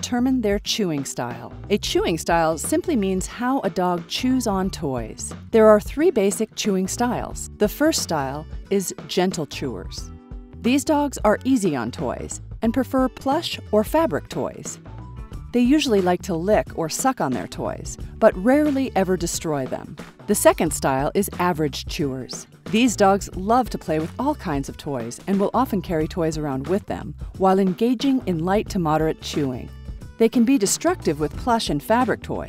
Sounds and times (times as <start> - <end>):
Speech: 0.0 - 10.1, 10.7 - 14.8, 15.6 - 32.4
Music: 0.0 - 32.4.